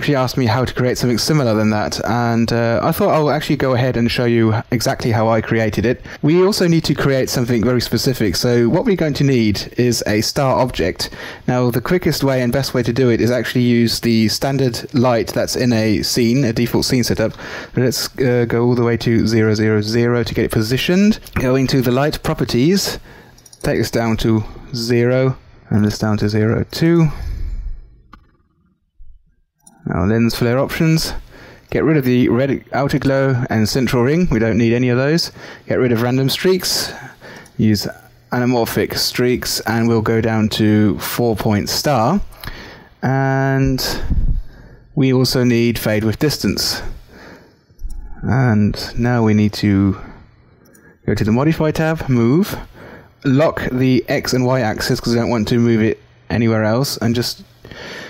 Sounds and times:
Speech: 0.0 - 23.0, 23.6 - 27.6, 29.8 - 42.4, 43.0 - 44.2, 45.0 - 47.0, 48.1 - 50.2, 51.0 - 57.5.

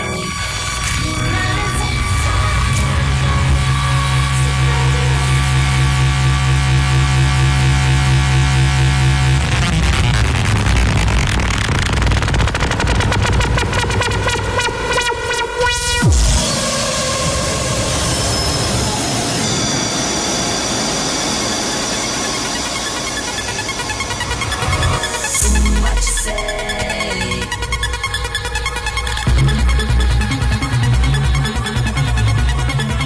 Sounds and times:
Techno: 0.0 - 33.0.

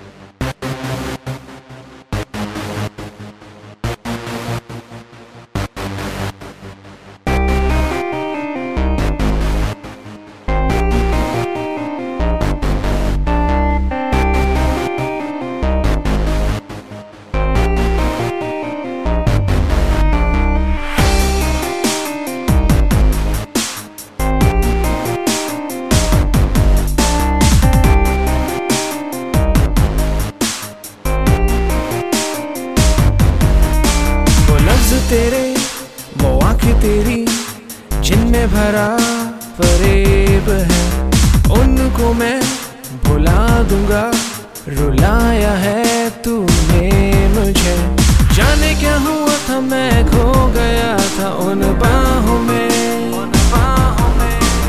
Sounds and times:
Dance music: 7.3 - 54.6.

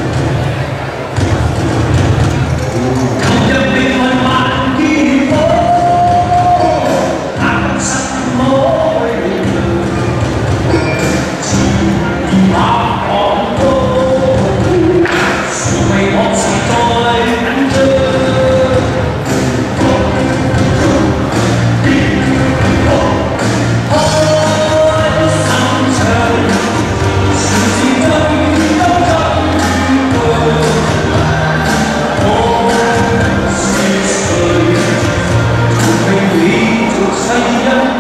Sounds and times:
Crowd: 0.0 - 38.0.

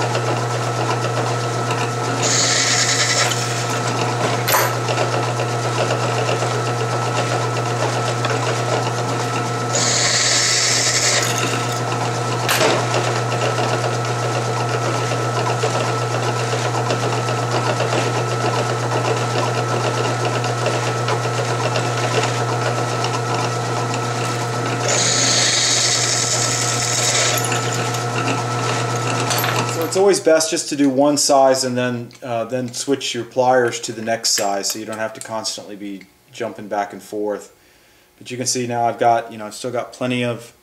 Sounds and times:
Drill: 0.0 - 30.0.

